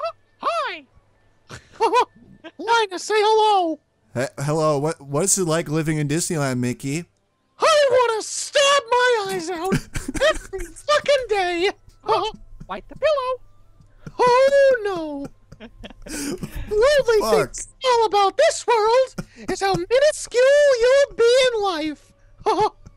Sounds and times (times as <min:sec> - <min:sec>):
Speech: 0:04.2 - 0:07.0, 0:07.7 - 0:13.4, 0:16.4 - 0:22.0.